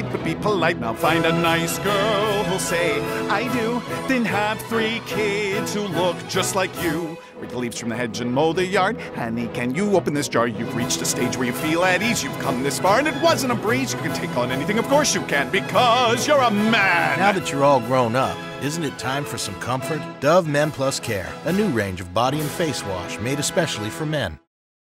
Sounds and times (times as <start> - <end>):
Music: 0.0 - 24.5
Speech: 7.5 - 24.5.